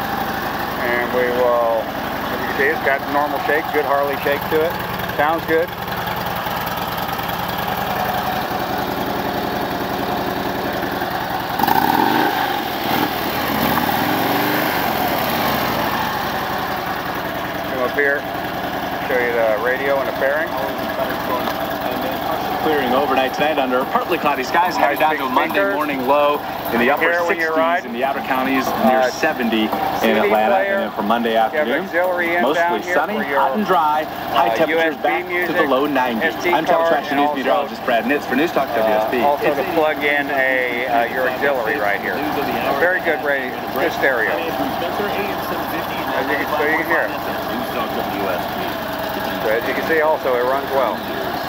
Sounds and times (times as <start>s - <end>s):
Motorcycle: 0.0s - 51.4s
Outside, urban or manmade: 0.0s - 51.4s
Speech: 0.8s - 5.7s, 17.7s - 18.2s, 19.0s - 51.4s.